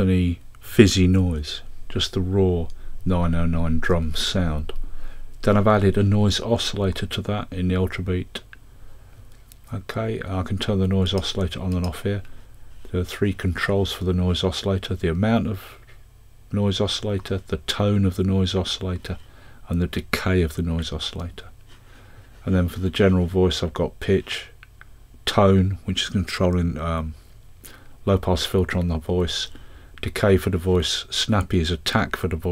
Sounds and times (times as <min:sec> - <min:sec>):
Speech: 0:00.0 - 0:04.8, 0:05.4 - 0:08.6, 0:09.7 - 0:12.3, 0:12.9 - 0:15.9, 0:16.5 - 0:21.6, 0:22.4 - 0:24.6, 0:25.2 - 0:27.2, 0:28.0 - 0:32.5.